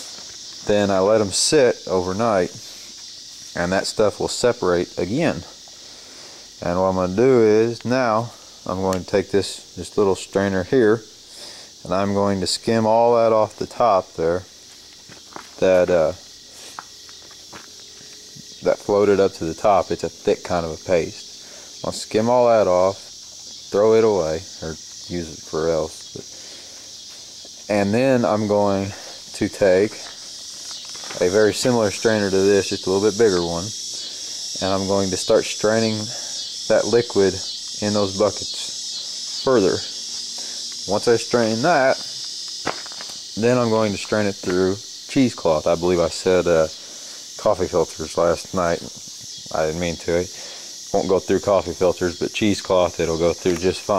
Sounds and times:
Outside, urban or manmade: 0.0s - 53.9s
Speech: 0.6s - 2.6s, 3.6s - 5.5s, 6.6s - 11.1s, 11.8s - 14.5s, 15.6s - 16.2s, 18.6s - 21.2s, 21.8s - 23.0s, 23.7s - 26.2s, 27.7s - 30.1s, 31.2s - 33.8s, 34.6s - 38.8s, 39.4s - 39.9s, 40.9s - 42.0s, 43.4s - 46.7s, 47.4s - 48.9s, 49.5s - 50.3s, 50.9s - 53.9s
Walk, footsteps: 14.7s - 15.6s, 16.7s - 18.2s, 42.0s - 43.2s.

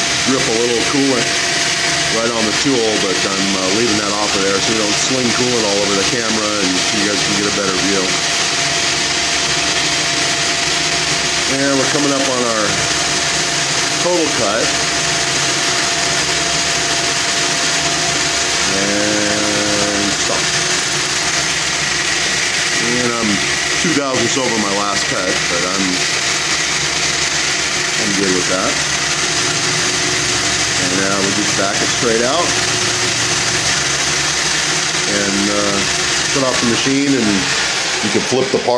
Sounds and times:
Speech: 0.3s - 1.3s, 2.1s - 8.2s, 11.5s - 12.8s, 14.0s - 14.8s, 18.7s - 20.5s, 22.8s - 26.0s, 28.0s - 28.8s, 30.8s - 32.6s, 35.1s - 38.7s.

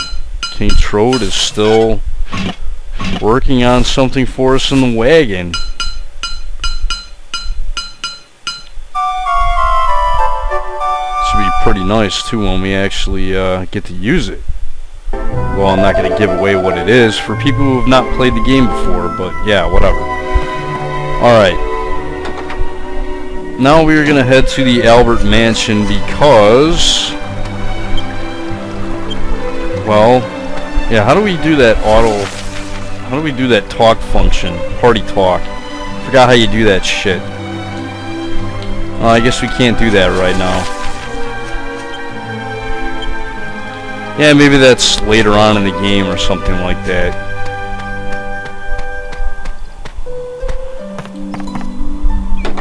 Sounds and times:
Speech: 0.6s - 2.0s, 3.2s - 5.6s, 11.2s - 14.4s, 15.5s - 20.0s, 21.2s - 21.6s, 23.6s - 27.2s, 29.8s - 30.3s, 30.9s - 32.3s, 33.1s - 35.4s, 36.0s - 37.2s, 39.0s - 40.7s, 44.2s - 47.2s
Music: 9.0s - 13.2s, 15.1s - 52.6s.

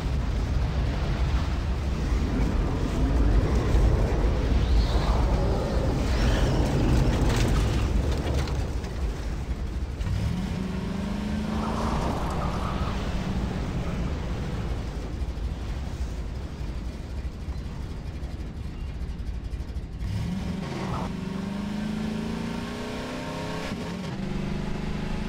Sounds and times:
Vehicle: 0.0s - 25.2s.

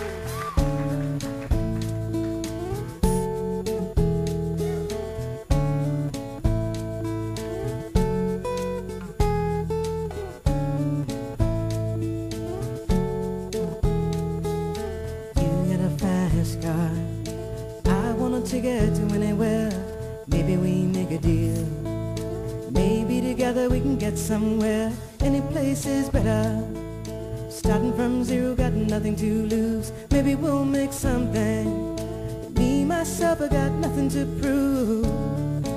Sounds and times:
Music: 0.0s - 35.7s.

